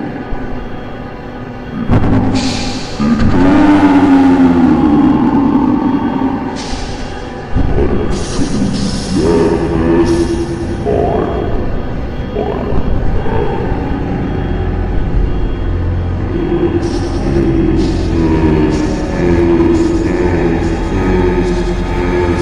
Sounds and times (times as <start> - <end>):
Scary music: 0.0 - 22.4.